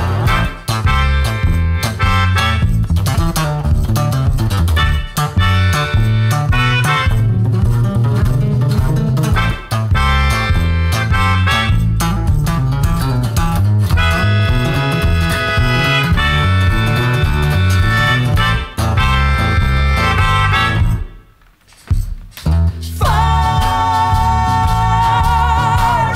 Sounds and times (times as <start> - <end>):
Guitar: 0.0 - 26.1.